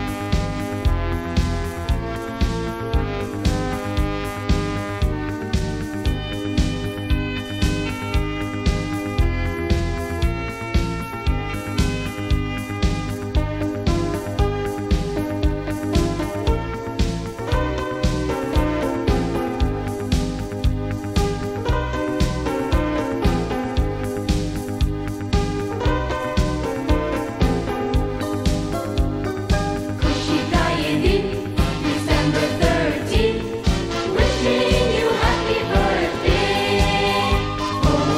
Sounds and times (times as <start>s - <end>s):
Music: 0.0s - 38.1s.